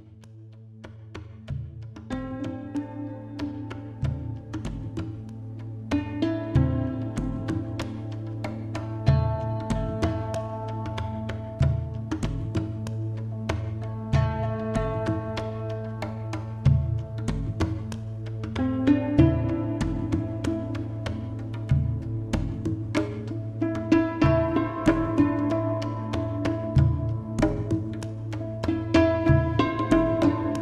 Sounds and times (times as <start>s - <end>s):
New-age music: 0.0s - 30.6s.